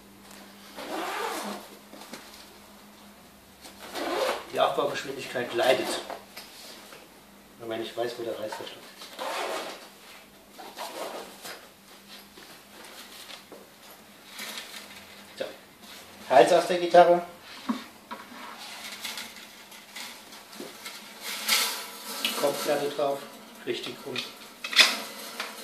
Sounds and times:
Speech: 4.5s - 6.1s, 7.6s - 8.9s, 15.4s - 15.6s, 16.3s - 17.4s, 22.3s - 24.4s.

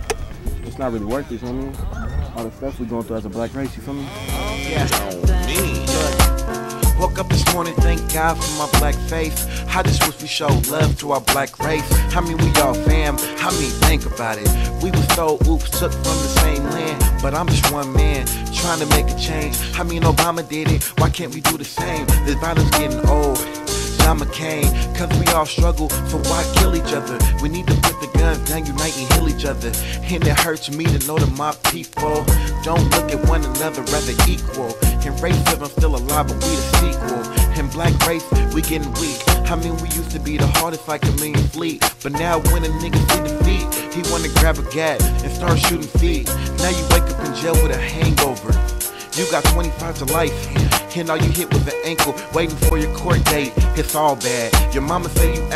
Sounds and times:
Funk: 0.0s - 55.5s.

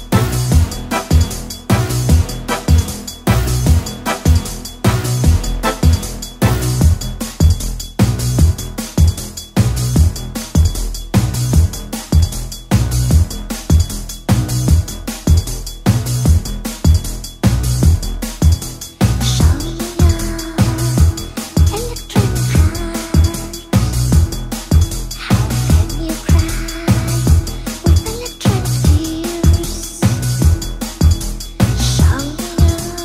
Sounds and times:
Music: 0.0s - 33.0s.

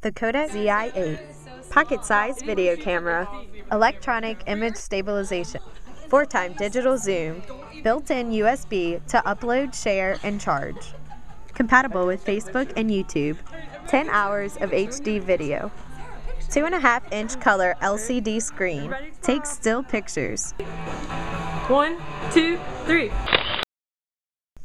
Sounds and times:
Speech: 0.0s - 10.9s, 11.6s - 15.7s, 16.5s - 20.6s.

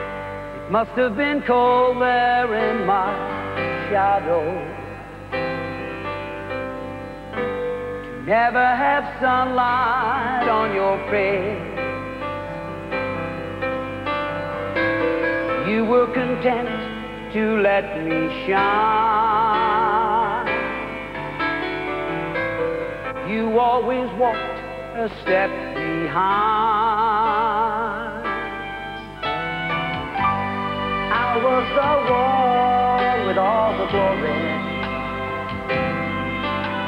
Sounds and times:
Music: 0.0s - 36.8s.

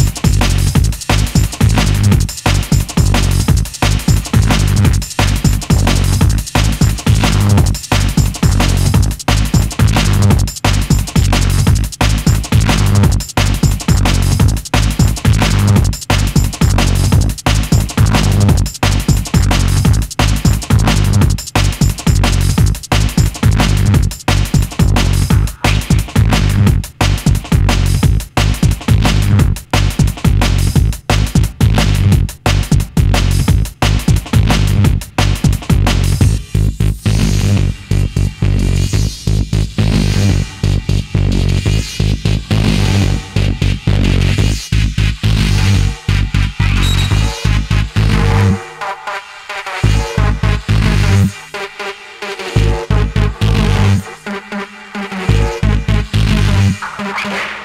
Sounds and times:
Electronic music: 0.0s - 57.6s.

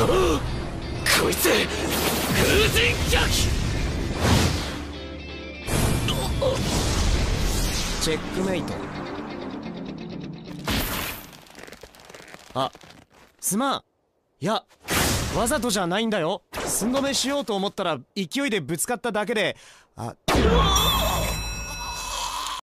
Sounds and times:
Speech: 8.0s - 8.8s, 13.4s - 13.8s, 15.4s - 21.3s.

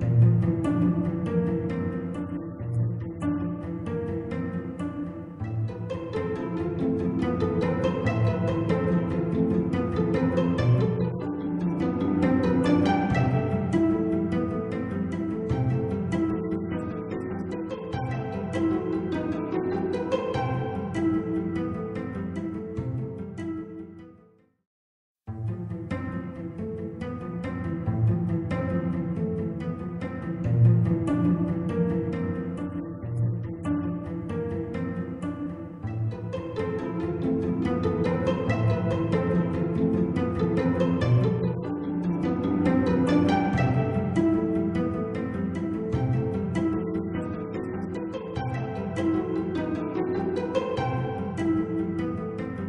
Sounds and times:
Music: 0.0s - 24.6s, 25.3s - 52.6s.

